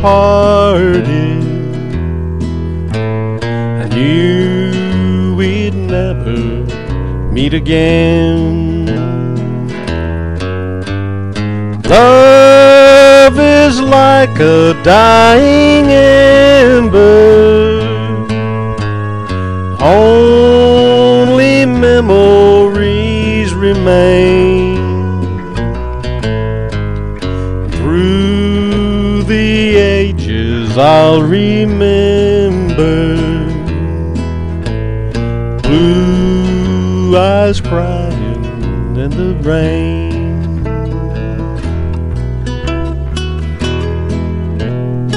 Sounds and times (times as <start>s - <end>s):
Music: 0.0s - 45.1s.